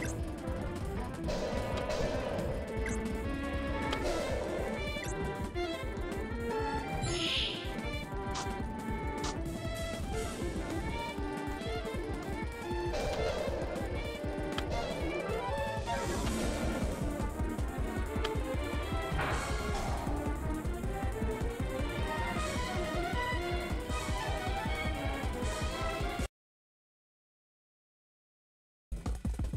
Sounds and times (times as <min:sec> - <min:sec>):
Music: 0:00.0 - 0:26.3, 0:29.0 - 0:29.5.